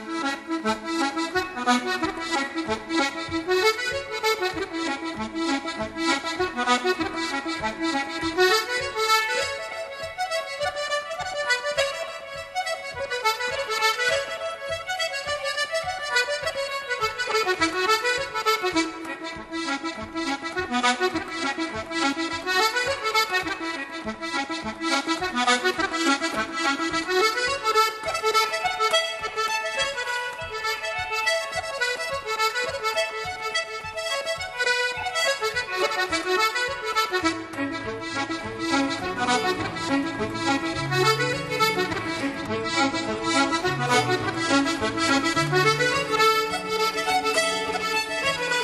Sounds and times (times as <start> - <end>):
Musical instrument: 0.0 - 48.6.